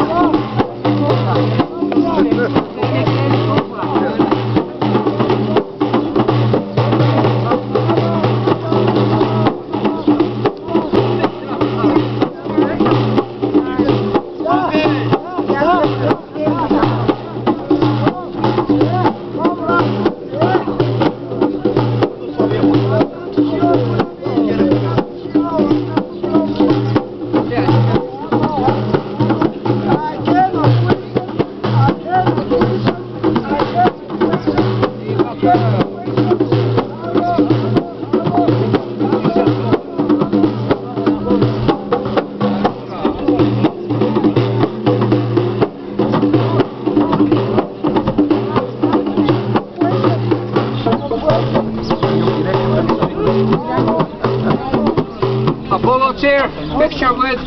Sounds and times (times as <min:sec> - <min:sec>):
Speech: 0:00.0 - 0:05.8, 0:06.8 - 0:44.7, 0:46.0 - 0:57.4
Music: 0:00.0 - 0:57.4
Outside, urban or manmade: 0:00.0 - 0:57.4.